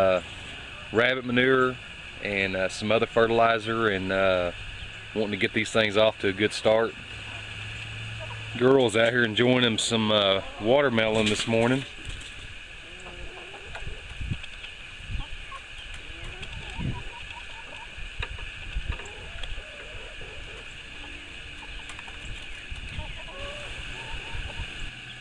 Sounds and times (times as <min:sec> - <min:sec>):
Outside, rural or natural: 0:00.0 - 0:25.2.